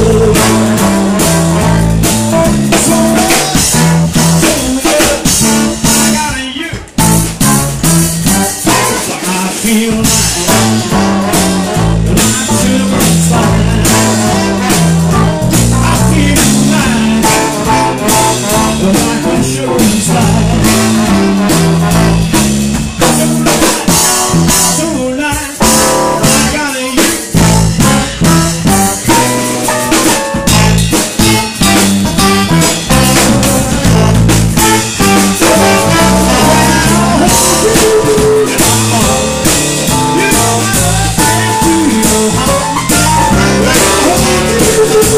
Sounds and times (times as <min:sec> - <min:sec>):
Music: 0:00.0 - 0:45.1.